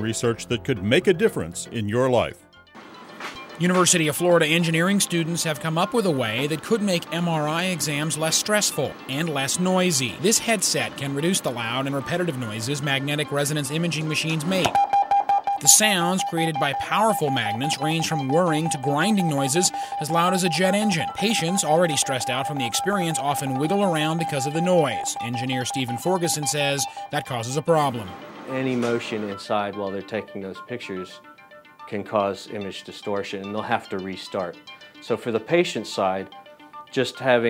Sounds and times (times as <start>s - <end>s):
Speech: 0.0s - 2.4s, 3.6s - 14.8s, 15.6s - 31.2s, 31.9s - 36.3s, 37.0s - 37.5s
Music: 0.0s - 37.5s.